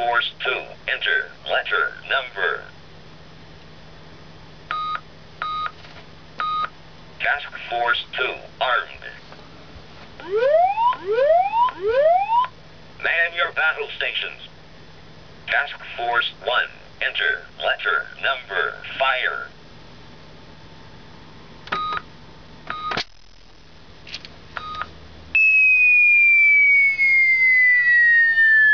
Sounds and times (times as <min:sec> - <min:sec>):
Speech: 0:00.0 - 0:02.7, 0:07.2 - 0:09.3, 0:13.0 - 0:14.5, 0:15.5 - 0:19.6.